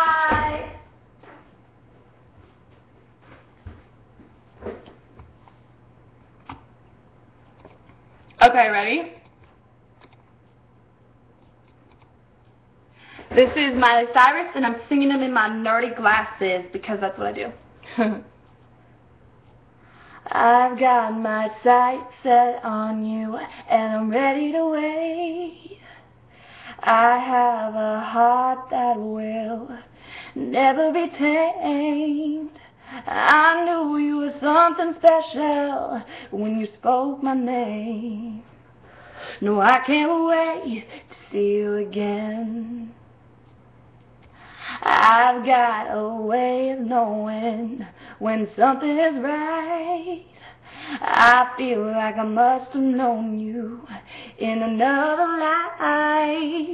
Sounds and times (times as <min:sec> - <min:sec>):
Female singing: 0:00.0 - 0:00.9, 0:20.2 - 0:25.8, 0:26.8 - 0:38.5, 0:39.4 - 0:43.0, 0:44.8 - 0:50.3, 0:51.0 - 0:56.7.